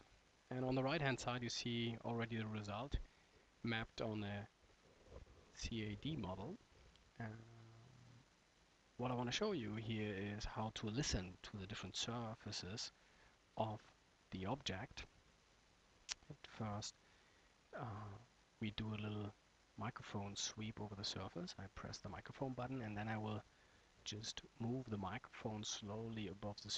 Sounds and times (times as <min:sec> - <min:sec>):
Speech: 0:00.5 - 0:03.0, 0:03.6 - 0:04.5, 0:05.6 - 0:06.6, 0:07.2 - 0:07.9, 0:09.0 - 0:12.9, 0:13.6 - 0:15.1, 0:16.1 - 0:17.0, 0:17.8 - 0:23.4, 0:24.0 - 0:26.7.